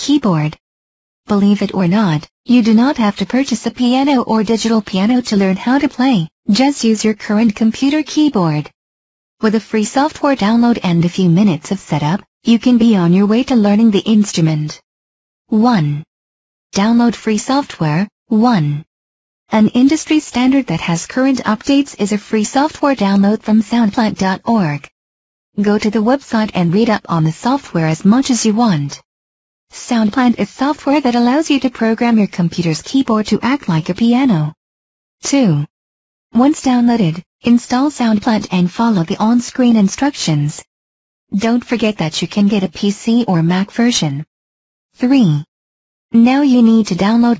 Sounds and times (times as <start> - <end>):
Speech: 0.0 - 0.6, 1.3 - 8.8, 9.4 - 14.8, 15.5 - 16.1, 16.7 - 18.9, 19.5 - 24.9, 25.6 - 29.0, 29.7 - 34.6, 35.2 - 35.7, 36.4 - 40.7, 41.3 - 44.3, 45.0 - 45.5, 46.1 - 47.3.